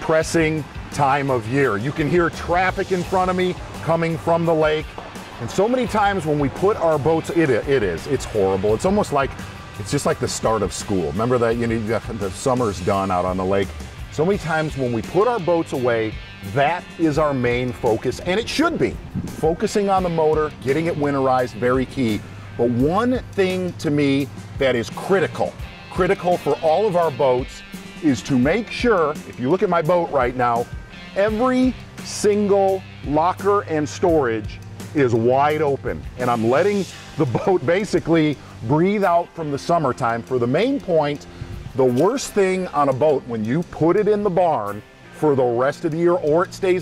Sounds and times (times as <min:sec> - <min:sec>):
Speech: 0:00.0 - 0:41.2, 0:41.8 - 0:46.8
Music: 0:00.0 - 0:46.8.